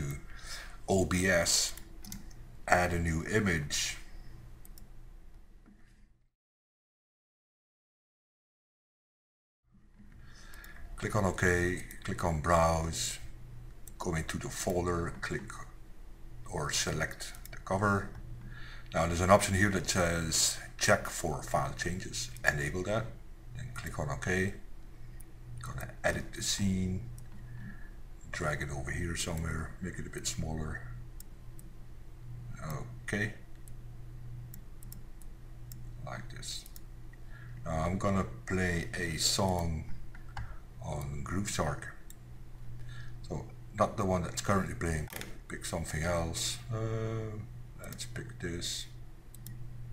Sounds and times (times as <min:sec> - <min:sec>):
Speech: 0:00.0 - 0:00.3, 0:00.9 - 0:01.8, 0:02.7 - 0:04.1, 0:11.0 - 0:13.3, 0:14.0 - 0:15.8, 0:16.5 - 0:18.2, 0:18.9 - 0:24.6, 0:25.6 - 0:27.1, 0:28.3 - 0:31.0, 0:32.6 - 0:33.4, 0:36.0 - 0:36.8, 0:37.6 - 0:40.0, 0:40.8 - 0:42.0, 0:43.2 - 0:49.0
Clicking: 0:01.8 - 0:02.4, 0:04.6 - 0:04.9, 0:17.4 - 0:17.6, 0:34.5 - 0:35.9, 0:36.6 - 0:36.9, 0:39.5 - 0:40.5, 0:49.3 - 0:49.6.